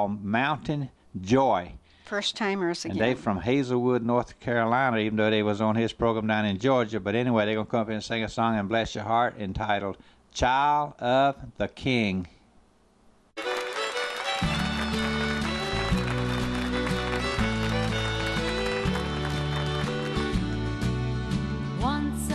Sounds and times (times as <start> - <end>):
Speech: 0.0 - 12.4
Gospel music: 13.4 - 22.3.